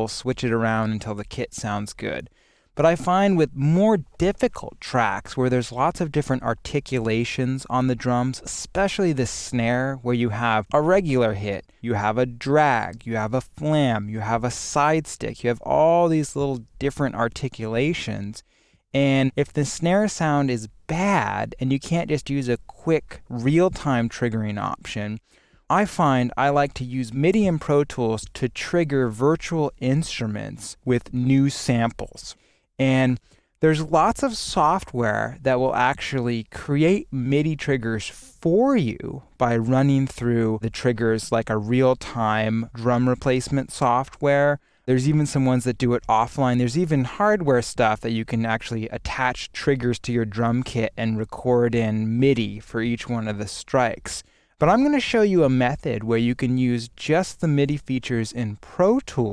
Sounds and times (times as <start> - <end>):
Speech: 0.0 - 59.3.